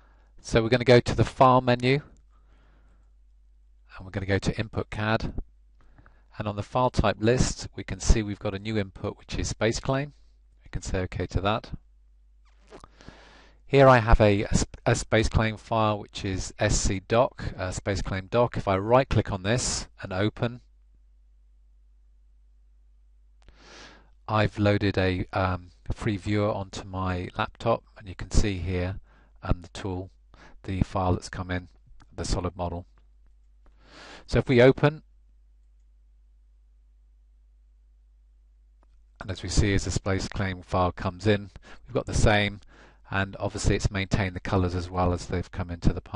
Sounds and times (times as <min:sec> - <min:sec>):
Speech: 0:00.4 - 0:02.1, 0:03.9 - 0:05.4, 0:06.3 - 0:11.8, 0:13.7 - 0:20.7, 0:24.3 - 0:32.9, 0:34.2 - 0:35.1, 0:39.2 - 0:46.1.